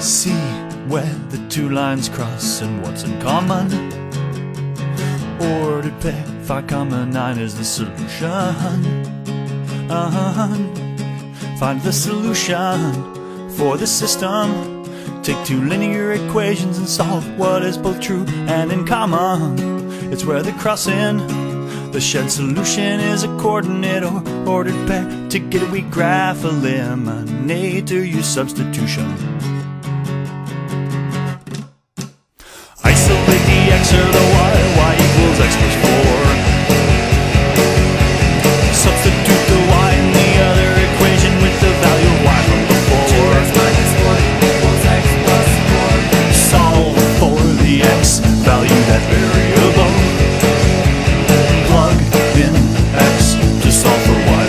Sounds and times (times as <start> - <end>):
Music: 0.0 - 54.4.